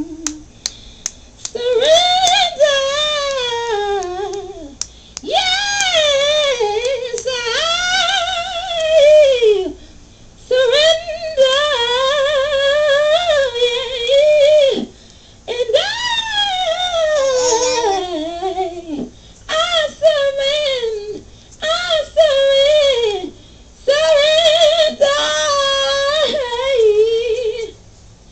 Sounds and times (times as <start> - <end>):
Female singing: 1.4 - 9.8, 10.5 - 14.9, 15.5 - 27.8.